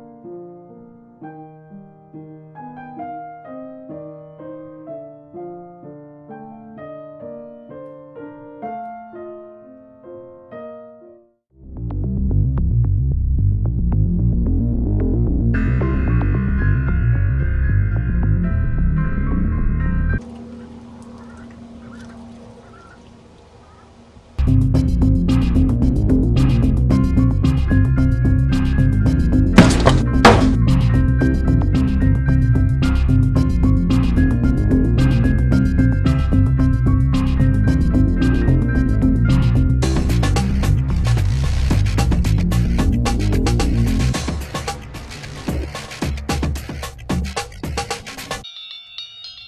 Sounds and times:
Music: 0.0 - 22.2, 24.4 - 49.4
Duck: 20.5 - 24.0.

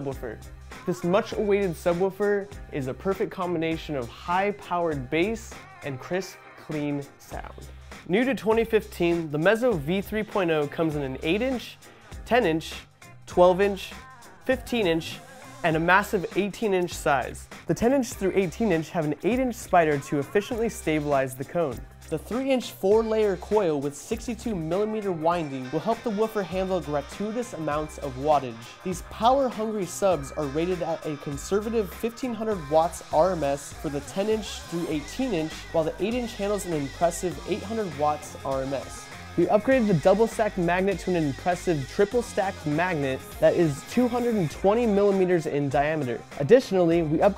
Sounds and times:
Music: 0.0 - 47.3
Speech: 0.0 - 47.3.

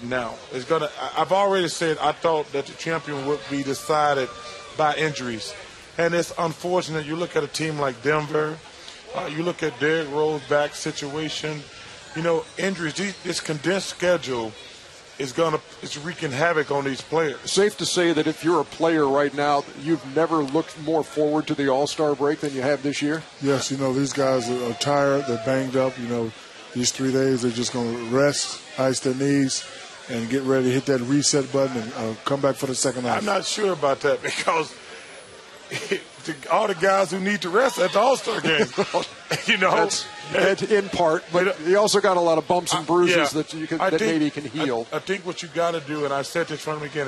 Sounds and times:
Speech: 0.0 - 14.6, 15.2 - 34.8, 36.2 - 47.0.

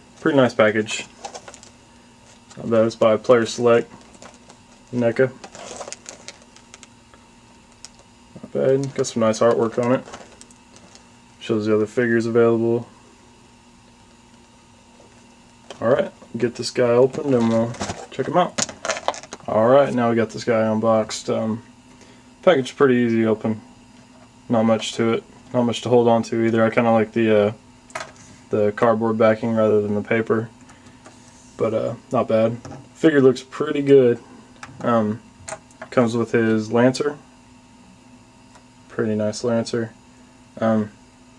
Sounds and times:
Speech: 0.2 - 1.1, 2.6 - 3.9, 4.9 - 5.4, 8.4 - 10.1, 11.4 - 12.9, 15.8 - 18.6, 19.5 - 21.6, 22.4 - 23.6, 24.5 - 27.6, 28.5 - 30.5, 31.6 - 34.2, 34.8 - 35.2, 35.9 - 37.3, 38.9 - 40.0, 40.6 - 41.0.

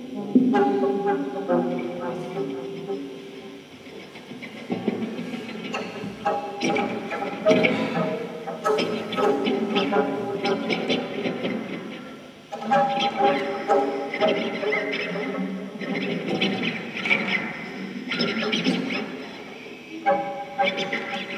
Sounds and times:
Plucked string instrument: 0.0 - 19.0.

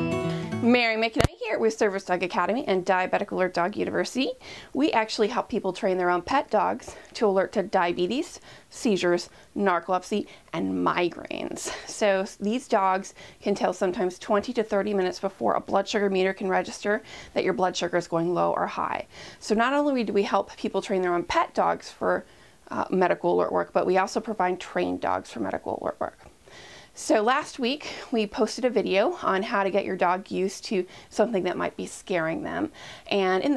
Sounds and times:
Speech: 0.6 - 26.3, 27.0 - 33.5.

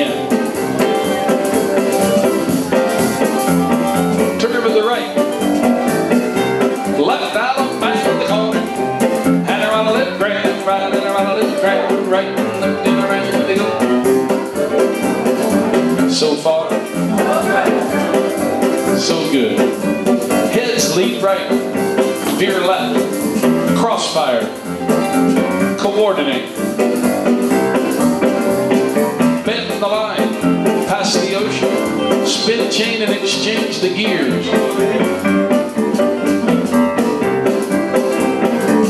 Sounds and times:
Speech: 0.0 - 0.3, 4.4 - 5.2, 7.0 - 8.7, 9.5 - 13.9, 16.1 - 17.9, 19.0 - 19.7, 20.5 - 21.6, 22.2 - 23.0, 23.7 - 24.6, 25.8 - 26.6, 29.4 - 35.1
Music: 0.0 - 38.8.

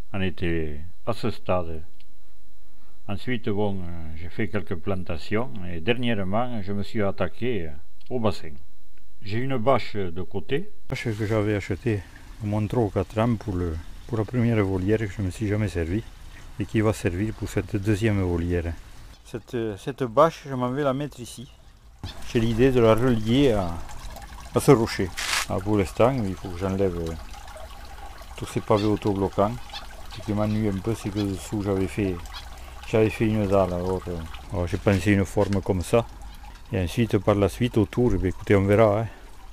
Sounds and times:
Speech: 0.1 - 1.9, 3.1 - 8.6, 9.2 - 21.5, 22.3 - 23.8, 24.6 - 27.2, 28.4 - 29.6, 30.2 - 32.2, 32.9 - 36.1, 36.7 - 39.2
Trickle, dribble: 10.9 - 39.5.

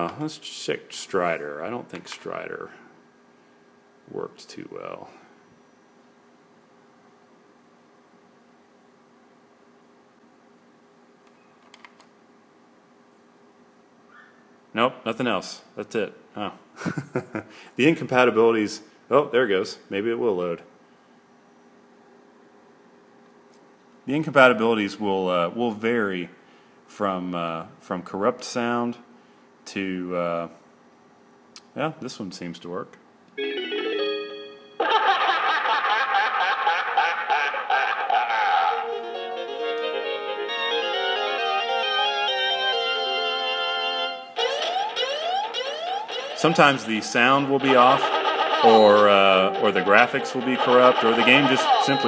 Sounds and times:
Speech: 0.0 - 2.9, 4.1 - 5.2, 14.8 - 16.6, 17.8 - 20.7, 24.1 - 29.1, 29.7 - 30.6, 31.6 - 33.0, 46.4 - 52.0.

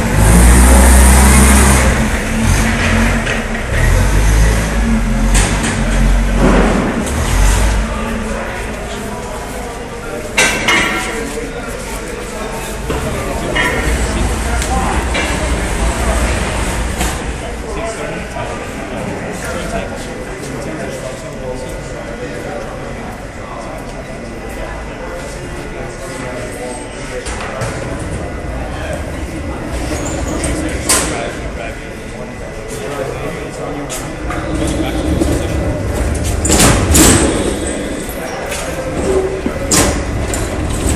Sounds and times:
Truck: 0.0 - 20.3, 20.9 - 40.9
Speech: 3.7 - 40.4.

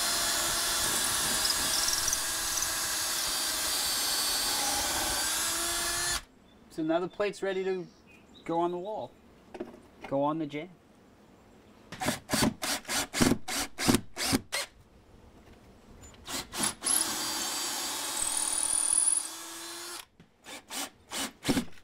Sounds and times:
Speech: 6.7 - 9.2, 10.0 - 10.8.

